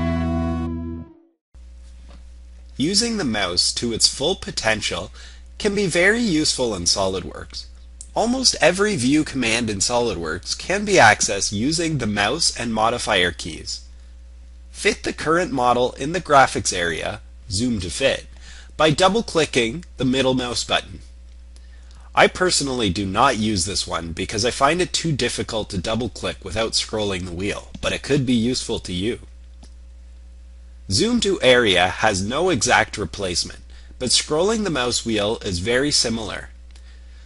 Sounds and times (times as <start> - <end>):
Speech: 2.8 - 13.9, 14.8 - 21.1, 22.1 - 29.3, 30.9 - 36.6.